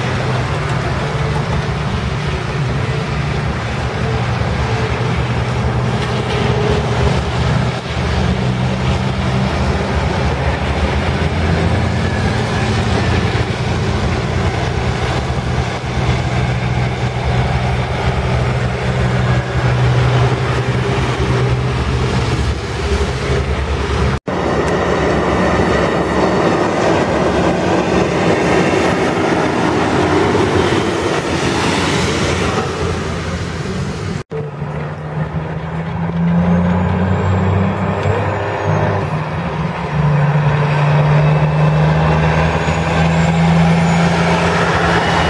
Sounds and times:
Truck: 0:00.0 - 0:45.2.

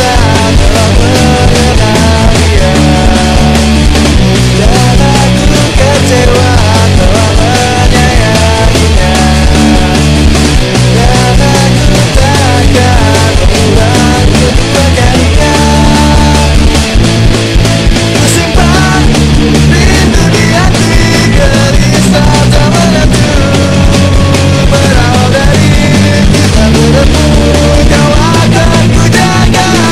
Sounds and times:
Punk rock: 0:00.0 - 0:29.9.

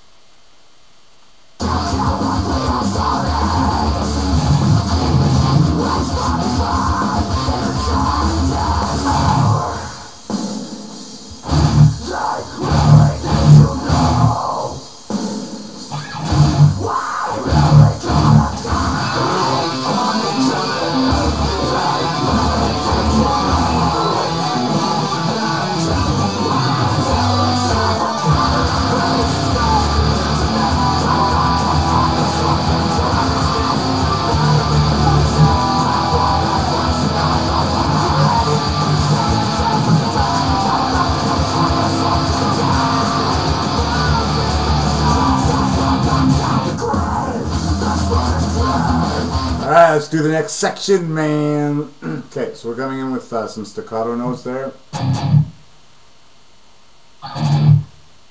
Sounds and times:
Electric guitar: 0:01.6 - 0:10.4, 0:11.3 - 0:15.2, 0:15.8 - 0:49.8, 0:54.9 - 0:55.6, 0:57.2 - 0:58.0.

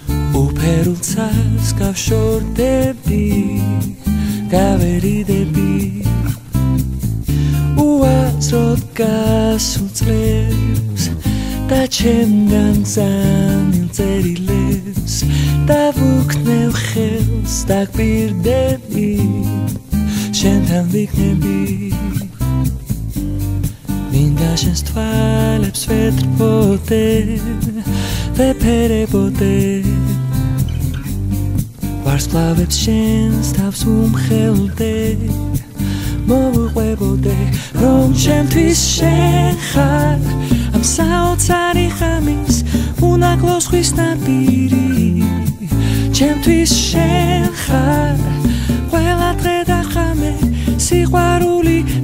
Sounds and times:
Music: 0:00.0 - 0:52.0.

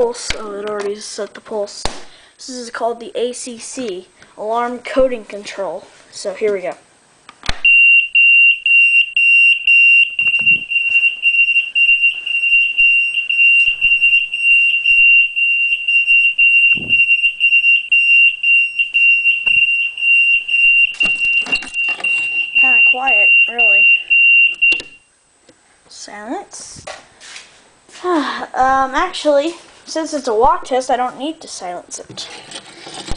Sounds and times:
Fire alarm: 0:07.6 - 0:25.1.

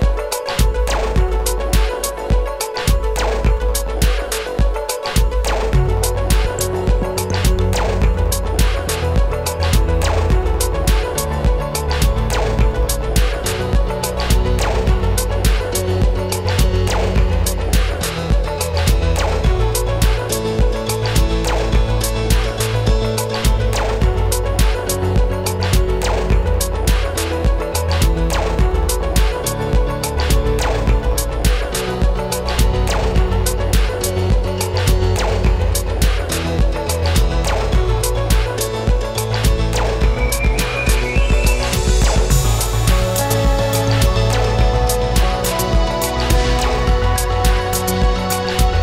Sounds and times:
Music: 0:00.0 - 0:48.8.

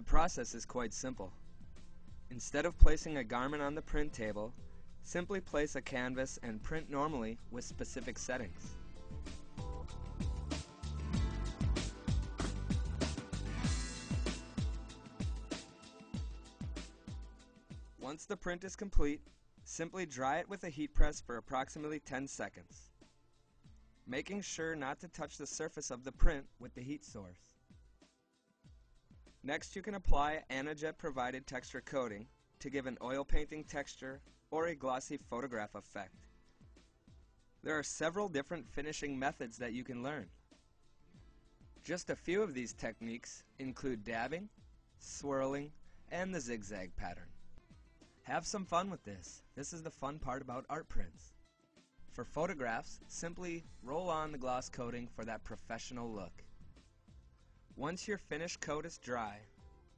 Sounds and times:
Speech: 0:00.0 - 0:01.4, 0:02.3 - 0:04.5, 0:05.1 - 0:08.8, 0:18.0 - 0:22.8, 0:24.1 - 0:27.4, 0:29.5 - 0:36.2, 0:37.7 - 0:40.3, 0:41.8 - 0:47.3, 0:48.3 - 0:51.3, 0:52.2 - 0:56.4, 0:57.8 - 0:59.5
Music: 0:00.0 - 0:59.9.

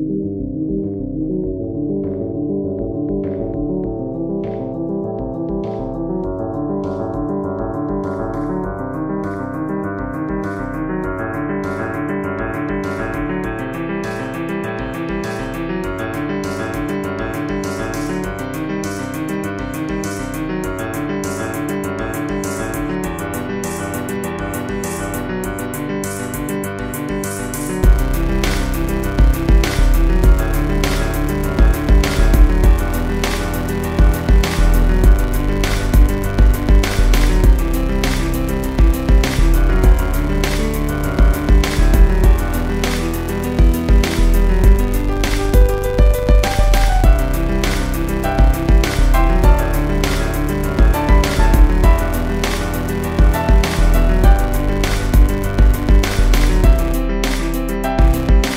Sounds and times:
Music: 0:00.0 - 0:58.5.

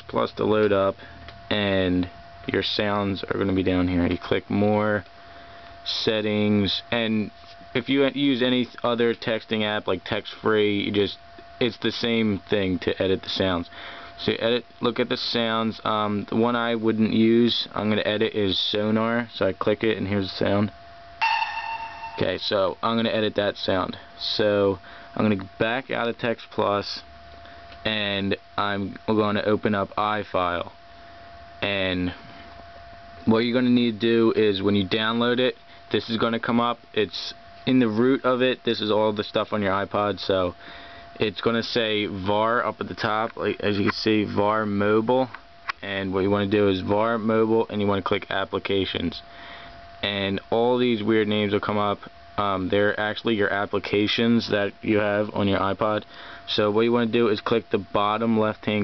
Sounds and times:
Speech: 0:00.0 - 0:05.1, 0:05.8 - 0:20.8, 0:22.2 - 0:27.1, 0:27.8 - 0:30.8, 0:31.6 - 0:32.2, 0:33.2 - 0:40.6, 0:41.2 - 0:49.3, 0:50.0 - 0:58.8.

